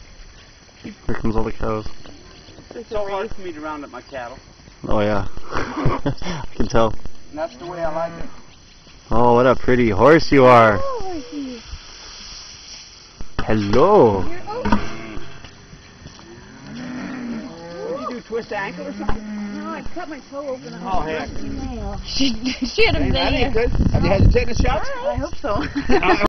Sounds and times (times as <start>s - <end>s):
Animal: 16.2s - 19.8s.